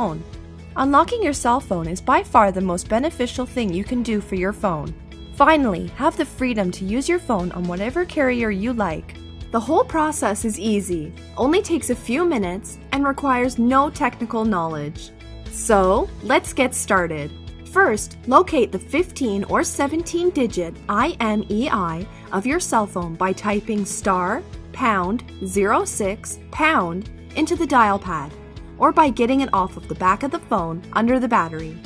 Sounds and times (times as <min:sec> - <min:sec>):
Speech: 0:00.0 - 0:00.2, 0:00.8 - 0:31.8
Music: 0:00.0 - 0:31.8.